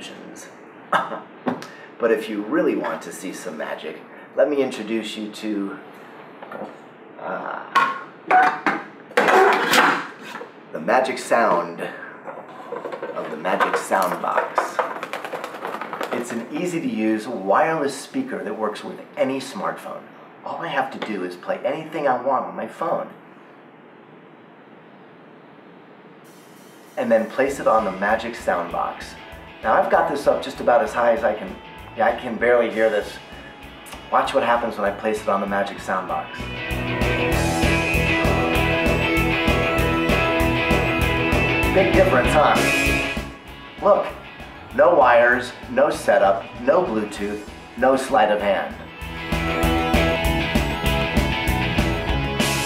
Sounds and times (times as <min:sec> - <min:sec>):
Speech: 0:00.0 - 0:00.6, 0:02.0 - 0:05.8, 0:06.5 - 0:07.8, 0:10.7 - 0:12.1, 0:13.2 - 0:14.8, 0:16.2 - 0:23.2, 0:27.0 - 0:33.2, 0:33.9 - 0:36.5, 0:41.7 - 0:42.8, 0:43.8 - 0:44.2, 0:44.8 - 0:48.8.